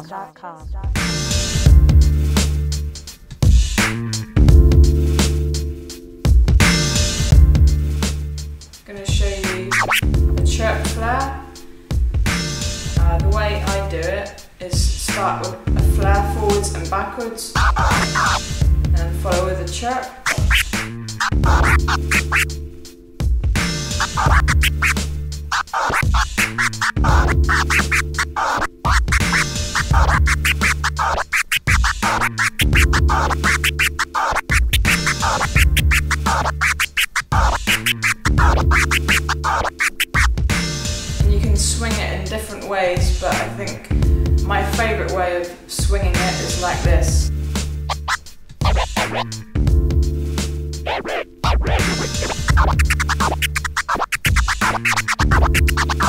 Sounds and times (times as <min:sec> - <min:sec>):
Scratching (performance technique): 0:09.4 - 0:10.2, 0:17.6 - 0:22.7, 0:23.6 - 0:41.1, 0:47.2 - 0:49.5, 0:50.8 - 0:56.0.